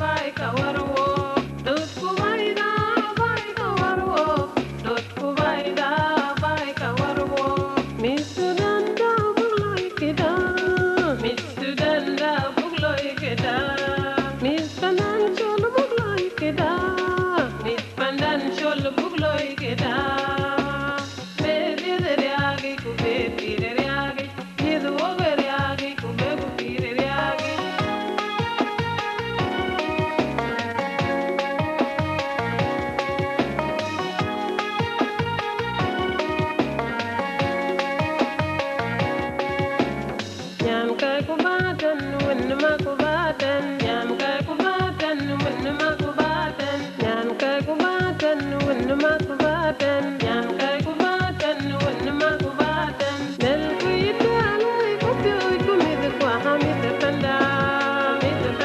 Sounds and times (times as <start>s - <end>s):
Music: 0.0s - 58.6s.